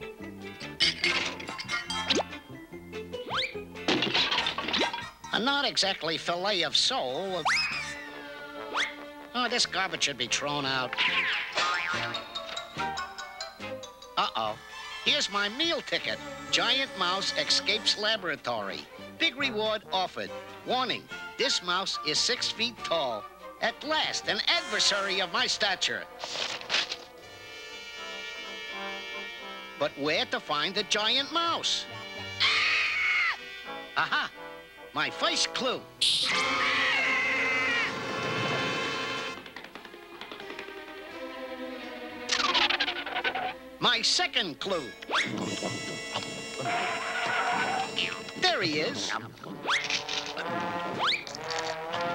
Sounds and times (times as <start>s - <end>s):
Music: 0.0s - 52.1s
Speech: 5.3s - 7.5s, 9.4s - 11.0s, 14.2s - 26.1s, 29.8s - 31.9s, 35.0s - 35.8s, 43.8s - 45.8s, 48.4s - 49.4s.